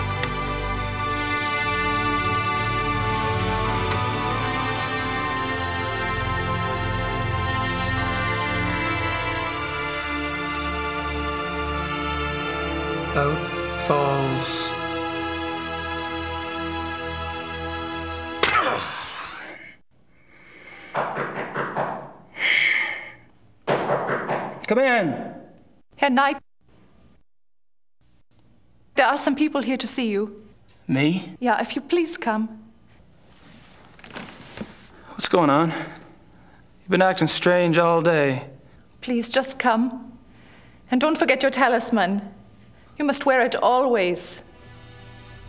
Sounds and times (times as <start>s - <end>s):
Female speech, woman speaking: 26.0s - 26.4s, 29.0s - 30.5s, 31.1s - 32.6s, 39.0s - 40.1s, 40.9s - 42.4s, 43.0s - 44.4s.